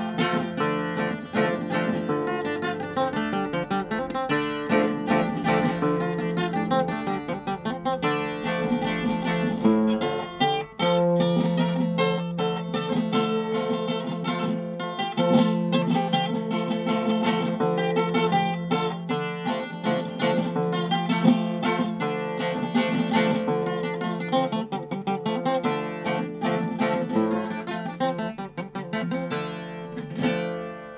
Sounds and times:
Acoustic guitar: 0.0s - 30.9s
Strum: 0.0s - 30.9s.

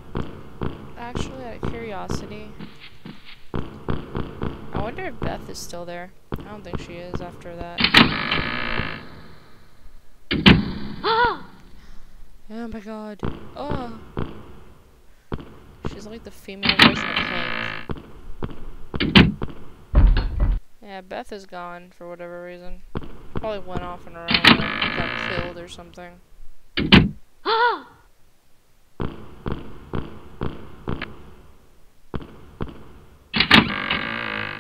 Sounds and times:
Speech: 1.0s - 2.6s, 4.8s - 7.8s, 12.5s - 14.0s, 15.9s - 17.8s, 20.8s - 22.8s, 23.4s - 26.2s.

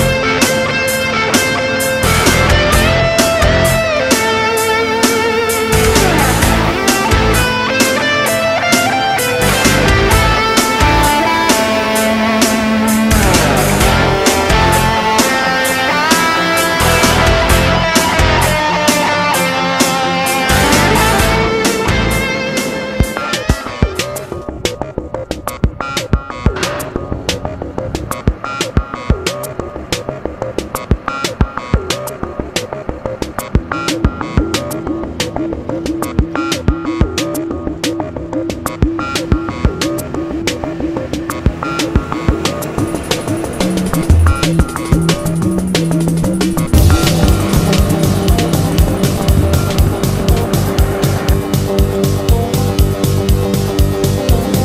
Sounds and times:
Music: 0.0s - 54.6s.

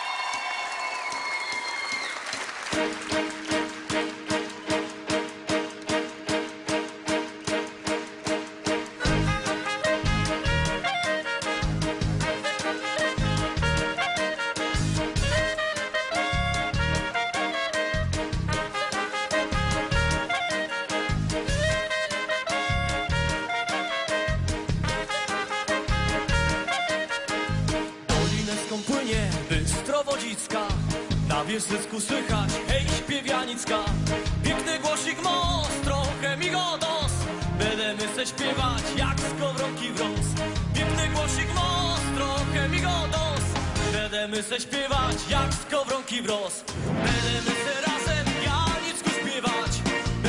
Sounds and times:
Music: 0.0s - 50.2s.

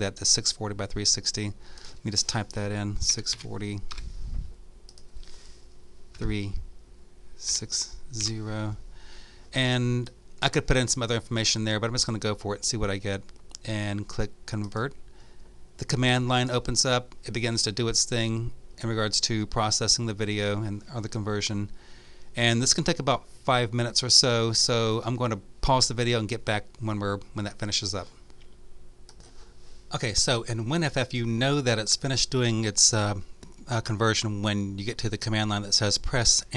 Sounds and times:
Speech: 0.0s - 3.9s, 6.2s - 6.6s, 7.4s - 8.8s, 9.6s - 15.0s, 15.8s - 21.7s, 22.4s - 28.2s, 29.9s - 36.5s.

